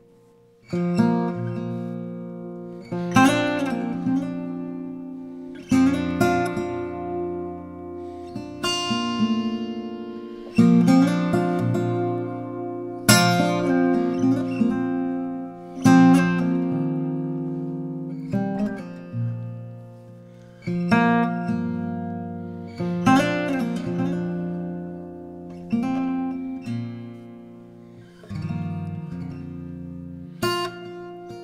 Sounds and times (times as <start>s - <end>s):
Acoustic guitar: 0.0s - 31.4s
Strum: 0.0s - 31.4s.